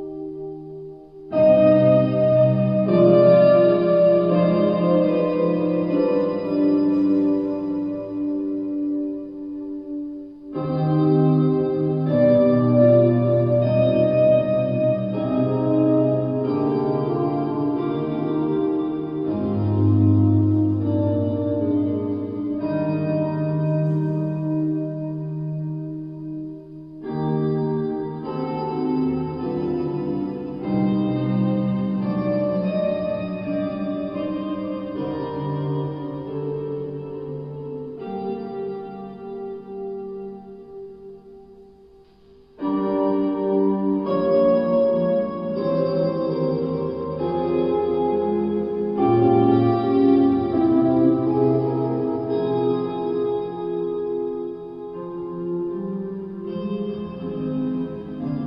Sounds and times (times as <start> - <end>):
Guitar: 0.0 - 58.4.